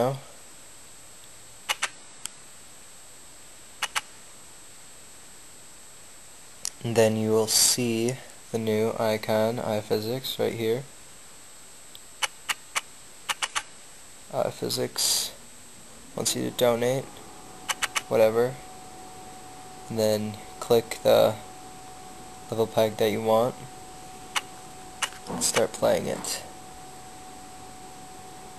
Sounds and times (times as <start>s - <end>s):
Speech: 0.0s - 0.4s, 6.7s - 10.9s, 14.3s - 15.4s, 16.2s - 17.1s, 18.1s - 18.6s, 19.9s - 21.4s, 22.5s - 23.7s, 25.3s - 26.5s.